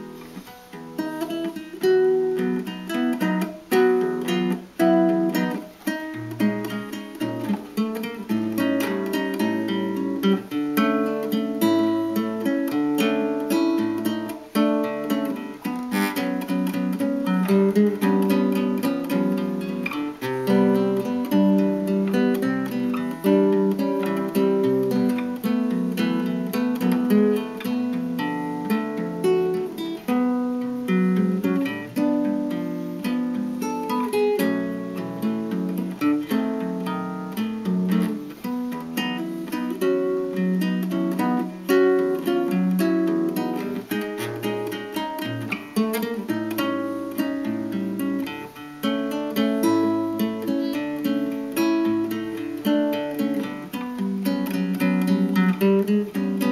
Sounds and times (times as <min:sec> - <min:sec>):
Acoustic guitar: 0:00.0 - 0:56.5
Strum: 0:00.0 - 0:56.5.